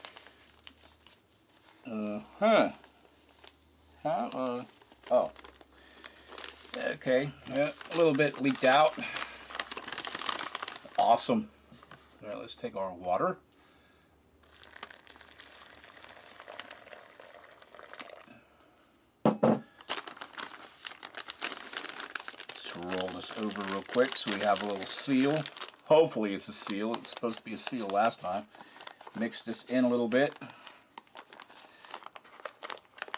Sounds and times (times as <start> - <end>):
Crumpling, crinkling: 0.0 - 12.2, 14.4 - 18.3, 19.8 - 33.1
Inside, small room: 0.0 - 33.1
Speech: 1.9 - 2.8, 4.0 - 5.4, 6.7 - 9.1, 11.0 - 11.5, 12.2 - 13.4, 22.6 - 28.5, 29.2 - 30.4.